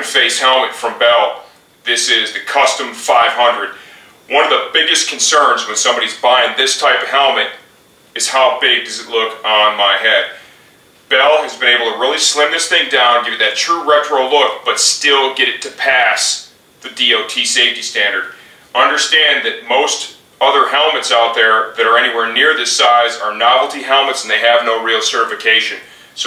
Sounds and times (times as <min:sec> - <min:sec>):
Speech: 0:00.0 - 0:10.4, 0:11.1 - 0:26.2.